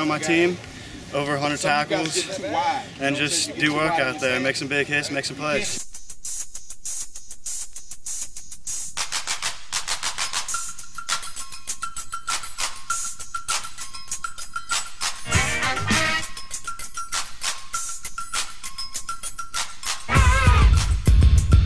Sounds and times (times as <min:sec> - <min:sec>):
Speech: 0:00.0 - 0:05.8
Music: 0:05.6 - 0:21.6.